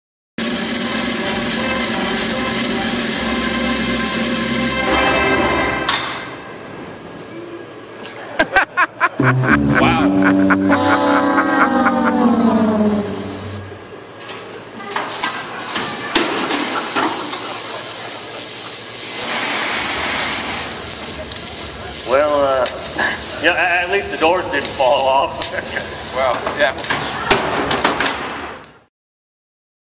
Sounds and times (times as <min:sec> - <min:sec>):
Speech: 0:21.4 - 0:25.5, 0:26.1 - 0:27.3.